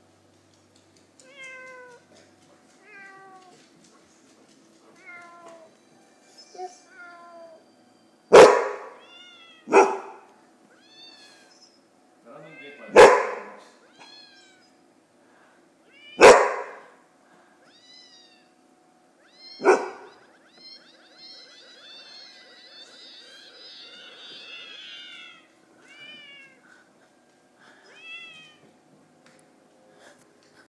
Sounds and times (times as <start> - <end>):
Meow: 1.2 - 2.1, 2.8 - 3.6, 5.0 - 5.8, 6.4 - 7.7, 8.9 - 9.7, 10.7 - 13.0, 13.9 - 14.8, 15.8 - 16.4, 17.6 - 18.6, 19.2 - 26.6, 27.8 - 28.7.